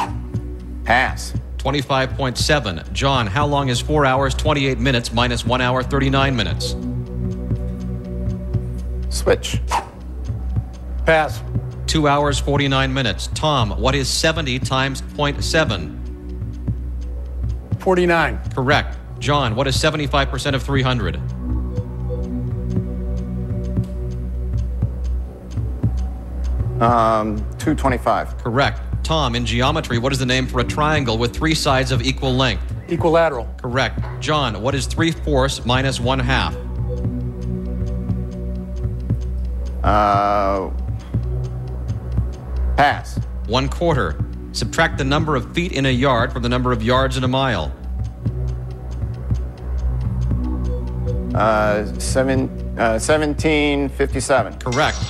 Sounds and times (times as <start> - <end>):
Music: 0.0 - 55.1
Speech: 0.9 - 6.8, 9.1 - 9.7, 11.1 - 16.0, 17.8 - 21.2, 26.8 - 36.6, 39.8 - 40.8, 42.8 - 47.8, 51.4 - 55.1.